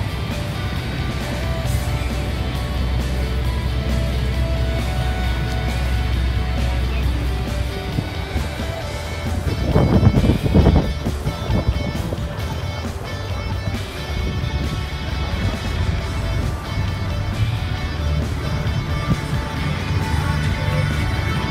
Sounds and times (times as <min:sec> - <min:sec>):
Electric guitar: 0:00.0 - 0:21.5.